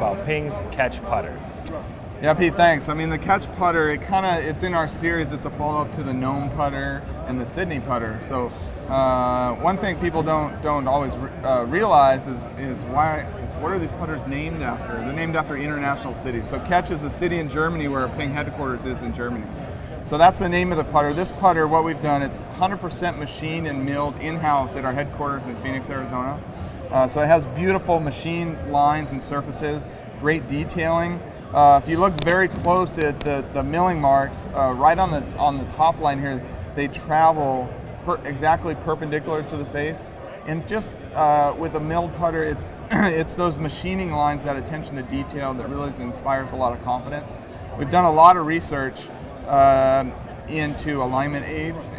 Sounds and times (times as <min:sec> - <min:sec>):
Speech: 0:00.0 - 0:51.9.